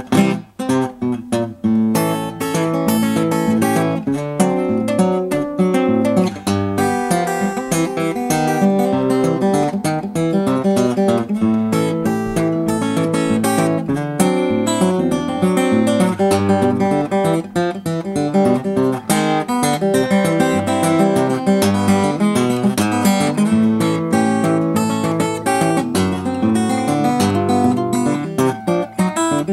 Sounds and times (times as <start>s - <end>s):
Music: 0.0s - 29.5s.